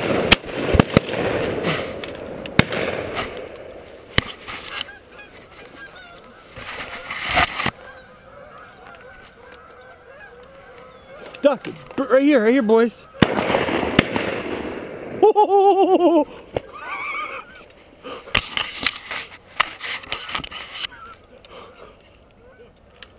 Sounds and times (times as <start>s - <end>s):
Honk: 4.6s - 12.3s.